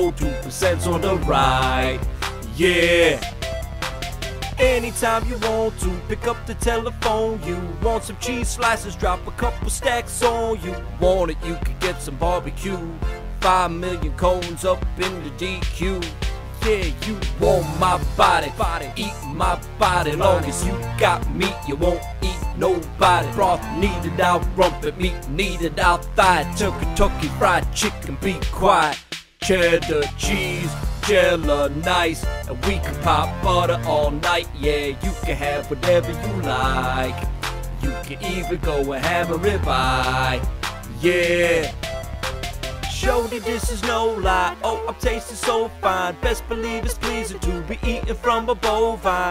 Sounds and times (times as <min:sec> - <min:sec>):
Rapping: 0:00.0 - 0:03.4, 0:04.6 - 0:41.8, 0:42.9 - 0:49.3
Music: 0:00.0 - 0:49.3.